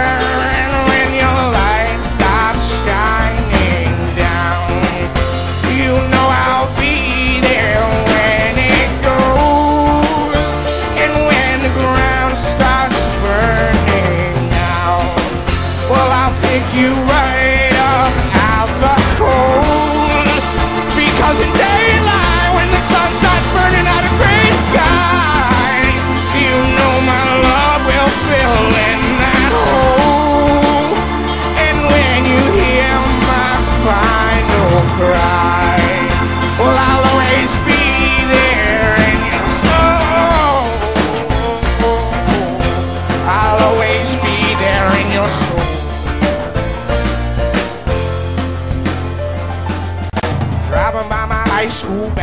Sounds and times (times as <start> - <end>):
Music: 0.0 - 52.2.